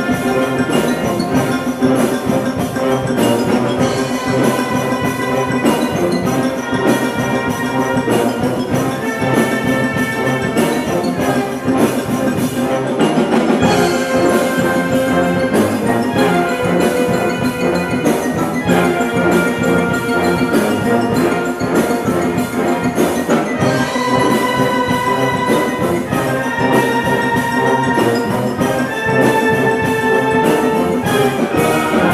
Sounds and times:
Orchestra: 0.0 - 32.1.

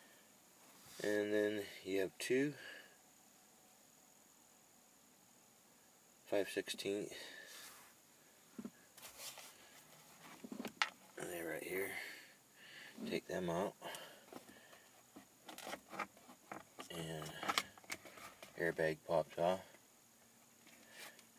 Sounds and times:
Speech: 1.0 - 2.7, 6.3 - 7.4, 11.2 - 12.2, 13.0 - 14.0, 16.8 - 17.5, 18.6 - 19.7.

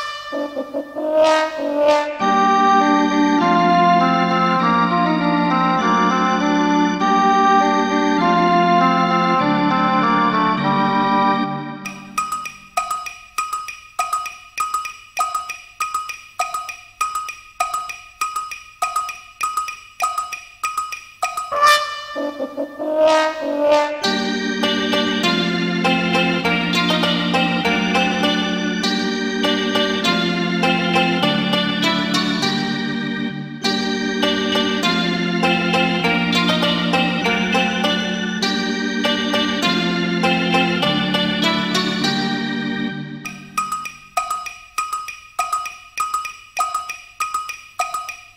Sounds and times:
Soundtrack music: 21.4 - 44.4.

